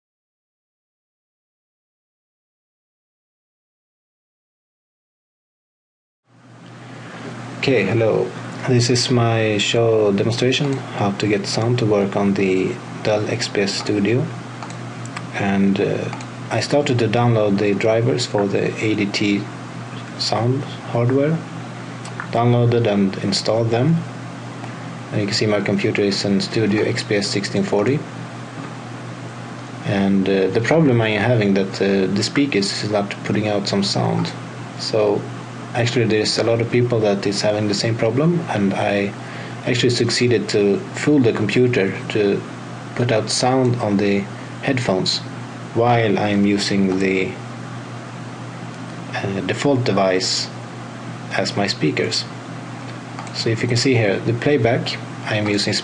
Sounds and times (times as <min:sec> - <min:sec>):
Speech: 0:07.6 - 0:14.4, 0:15.3 - 0:21.5, 0:22.1 - 0:24.1, 0:25.1 - 0:28.1, 0:29.8 - 0:47.4, 0:49.1 - 0:50.6, 0:51.3 - 0:52.4, 0:53.3 - 0:55.8.